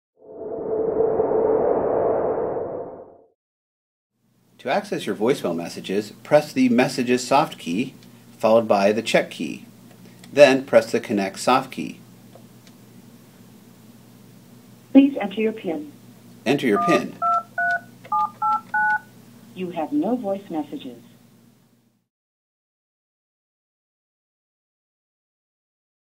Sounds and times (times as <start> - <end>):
Speech: 4.6 - 9.7, 10.3 - 12.0, 15.0 - 17.2, 19.6 - 21.1.